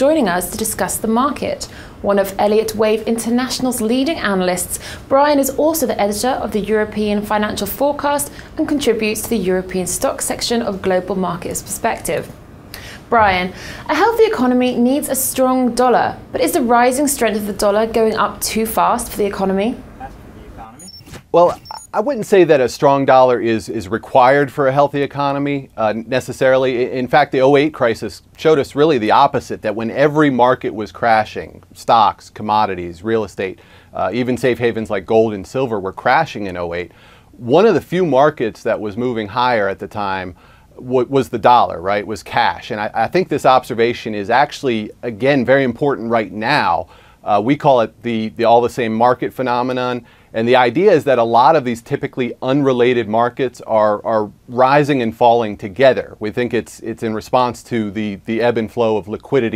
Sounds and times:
Speech: 0.0 - 12.3, 13.1 - 59.5.

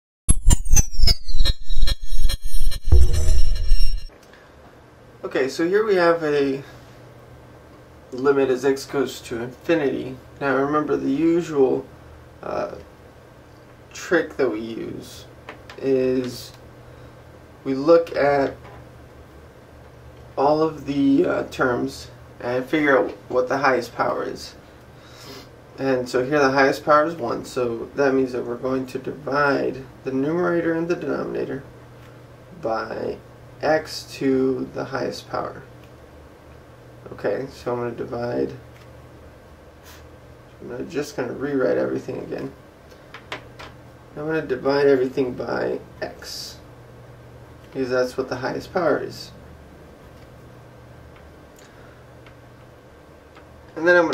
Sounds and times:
Inside, small room: 0.3 - 54.1
Speech: 5.2 - 6.7, 8.1 - 12.9, 13.9 - 16.6, 17.6 - 18.6, 20.4 - 24.6, 25.8 - 31.7, 32.6 - 35.7, 37.0 - 38.6, 40.6 - 42.6, 44.2 - 46.6, 47.7 - 49.4, 53.8 - 54.1.

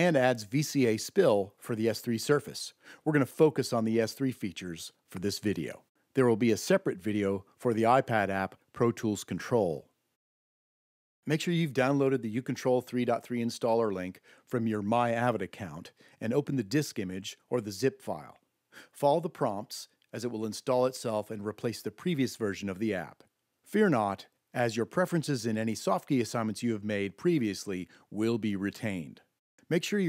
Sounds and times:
Speech: 0.0 - 10.0, 11.2 - 30.0.

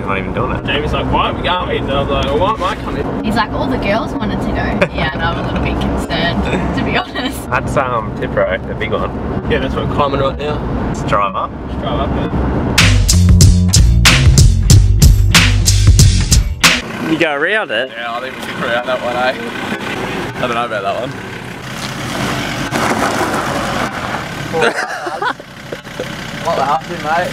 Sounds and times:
Truck: 0.0 - 13.4, 16.6 - 27.3
Music: 12.8 - 16.8
Tire squeal: 21.6 - 24.6.

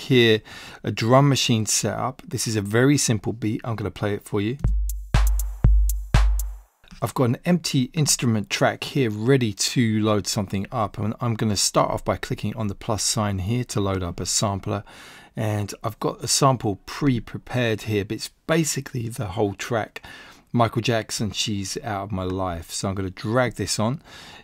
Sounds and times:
Speech: 0.0 - 4.6, 6.9 - 24.0.

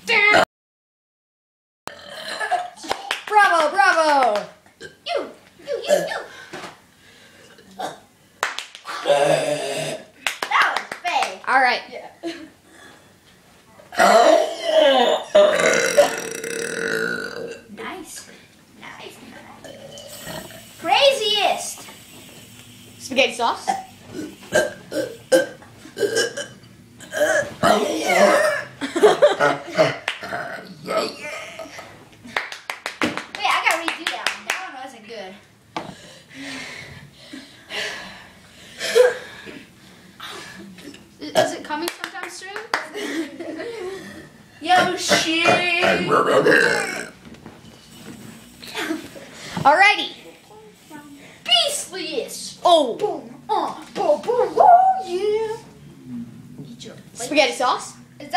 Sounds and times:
Child speech, kid speaking: 0.0 - 0.4, 5.0 - 6.3, 10.4 - 12.2, 17.7 - 19.6, 20.8 - 21.8, 23.0 - 23.8, 33.4 - 35.4, 41.2 - 43.0, 44.6 - 46.4, 49.6 - 55.8, 56.7 - 58.3
Burping, eructation: 1.9 - 2.8, 4.8 - 5.0, 8.9 - 10.2, 13.9 - 17.7, 19.6 - 20.7, 24.1 - 28.8, 29.8 - 31.7, 45.1 - 47.2.

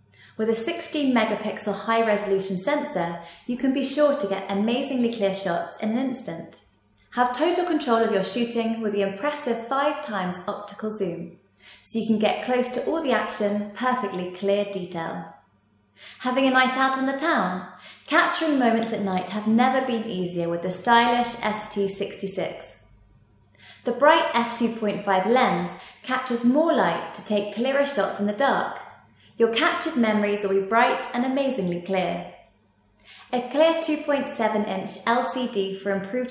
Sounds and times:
Speech: 0.4 - 6.6, 7.2 - 15.4, 16.1 - 22.9, 23.8 - 28.8, 29.4 - 32.3, 33.3 - 36.3.

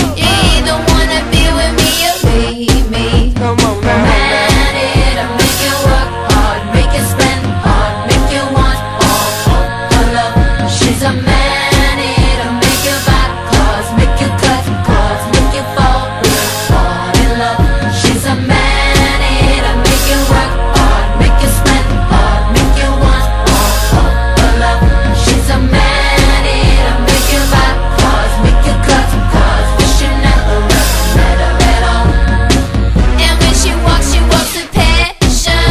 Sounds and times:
Music: 0.0 - 35.7.

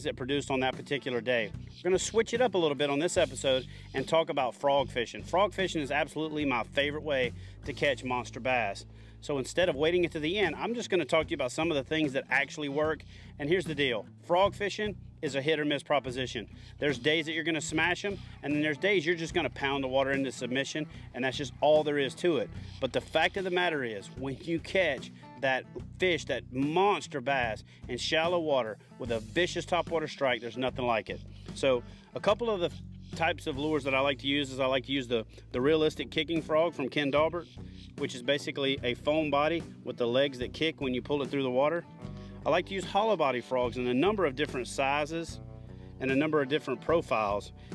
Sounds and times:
Speech: 0.0 - 41.8, 42.4 - 45.4, 46.0 - 47.5
Music: 0.0 - 47.7.

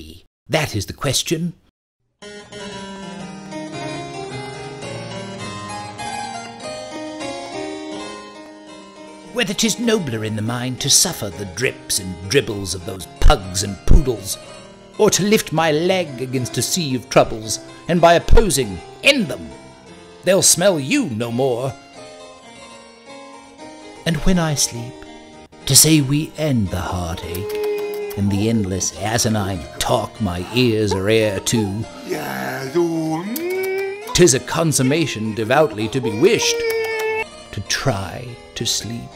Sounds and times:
Speech: 0.0 - 1.6, 9.3 - 14.4, 15.0 - 19.5, 20.3 - 21.8, 24.1 - 24.9, 25.7 - 36.7, 37.6 - 39.1
Music: 2.1 - 39.1.

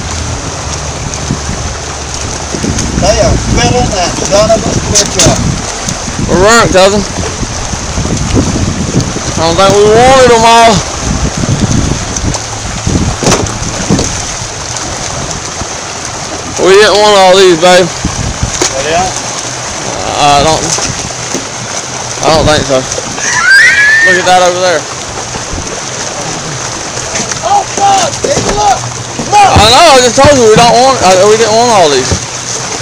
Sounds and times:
Outside, rural or natural: 0.0 - 32.8
Slosh: 0.0 - 32.8.

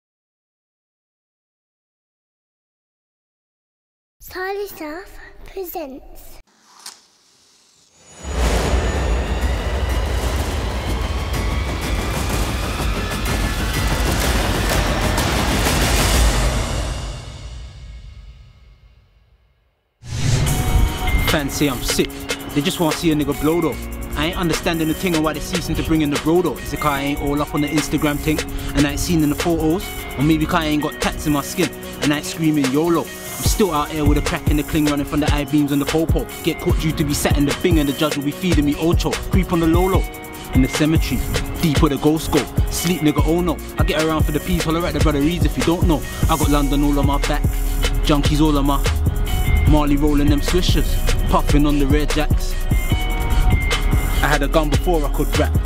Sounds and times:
Speech: 4.2 - 6.4, 21.2 - 49.0, 49.6 - 52.6, 54.2 - 55.6
Music: 8.0 - 55.6.

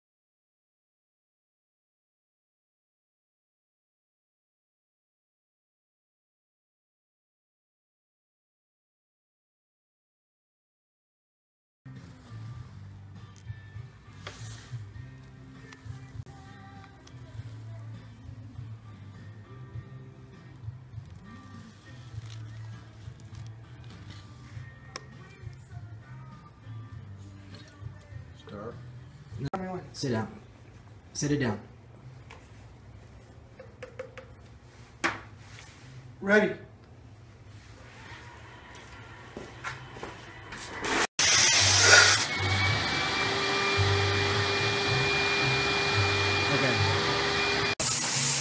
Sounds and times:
Music: 11.9 - 30.5, 31.3 - 33.0, 35.5 - 36.2, 37.8 - 40.8, 41.4 - 48.4.

